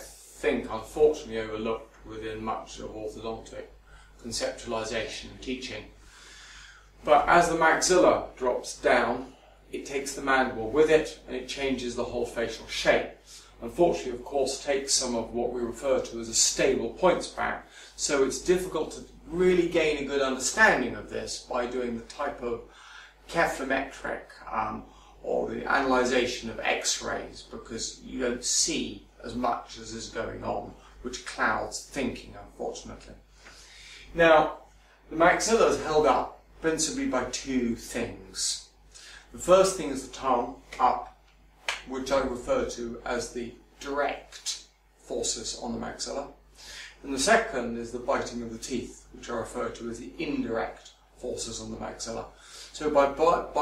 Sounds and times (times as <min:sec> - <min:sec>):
Speech: 0:00.0 - 0:06.0, 0:07.0 - 0:33.3, 0:34.0 - 0:53.6.